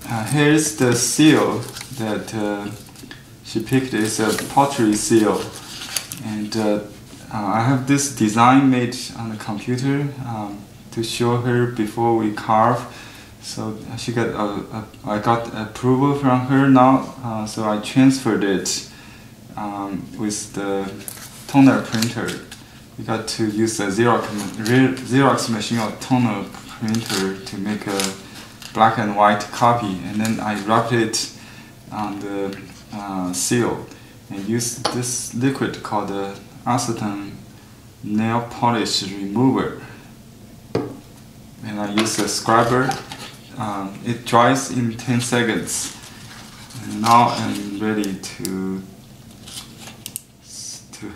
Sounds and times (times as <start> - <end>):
Speech: 0.0 - 2.8, 3.4 - 5.6, 6.2 - 18.9, 19.6 - 28.2, 28.8 - 37.4, 38.0 - 40.0, 41.6 - 46.0, 46.7 - 48.9, 50.5 - 51.1.